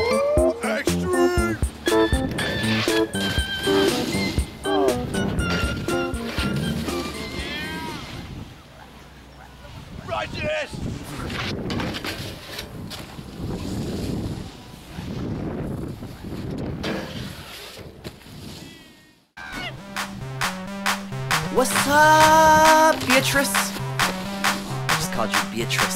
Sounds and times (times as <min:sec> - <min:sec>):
Music: 0:00.0 - 0:07.9, 0:19.4 - 0:25.9.